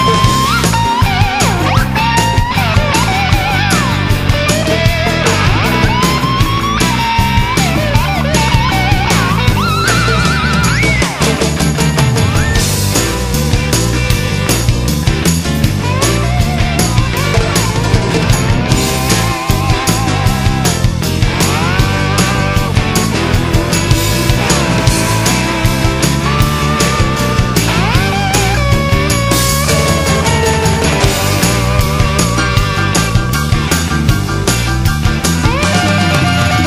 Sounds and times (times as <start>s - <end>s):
Music: 0.0s - 36.6s.